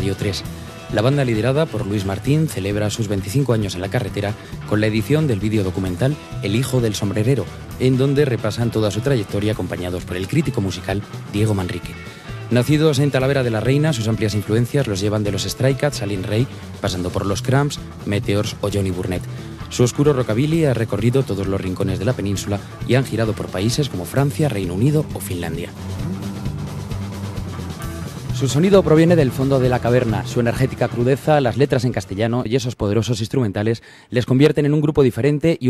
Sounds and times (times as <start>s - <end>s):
Speech: 0.0s - 26.3s, 28.4s - 35.6s
Music: 0.0s - 35.6s.